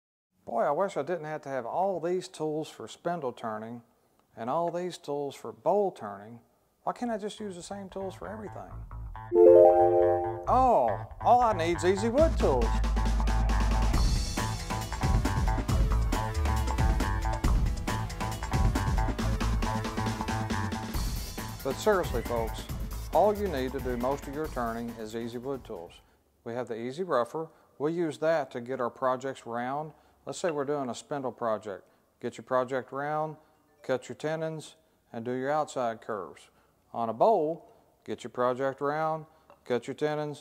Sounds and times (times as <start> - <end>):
Speech: 0.4 - 8.8, 10.4 - 12.8, 21.6 - 40.4.